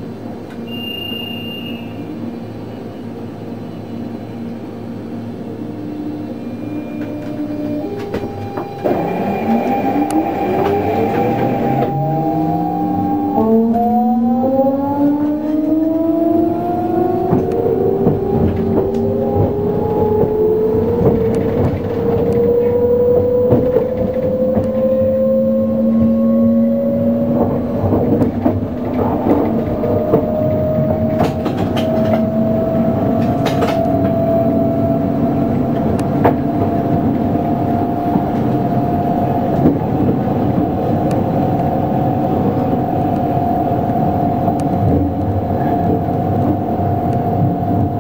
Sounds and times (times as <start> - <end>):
Train: 0.0 - 48.0.